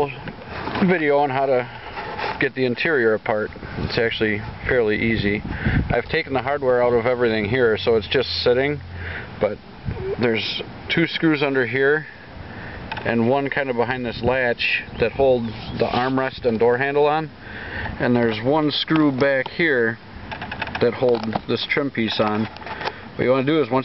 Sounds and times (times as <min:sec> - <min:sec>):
Speech: 0:00.0 - 0:01.7, 0:02.4 - 0:08.8, 0:09.4 - 0:12.1, 0:13.0 - 0:17.3, 0:18.0 - 0:20.0, 0:20.8 - 0:22.5, 0:23.2 - 0:23.8.